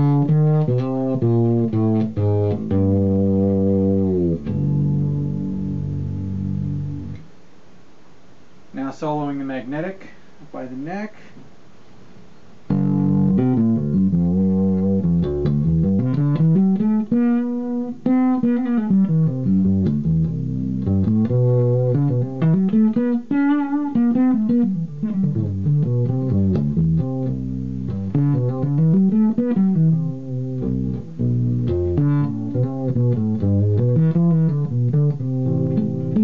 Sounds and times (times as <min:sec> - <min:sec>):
Bass guitar: 0:00.0 - 0:07.5, 0:08.8 - 0:36.2.